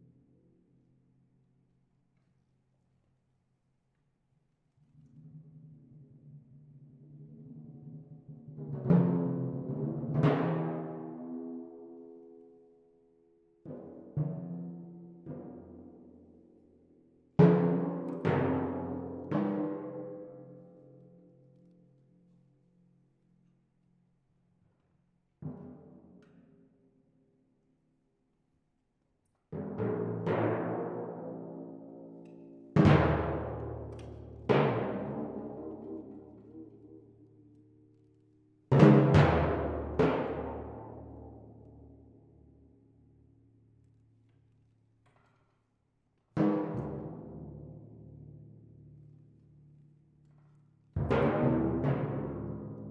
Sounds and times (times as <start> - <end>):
Timpani: 5.4 - 12.1, 17.4 - 20.6, 29.6 - 37.6, 38.7 - 42.2, 46.4 - 49.0, 50.6 - 52.9.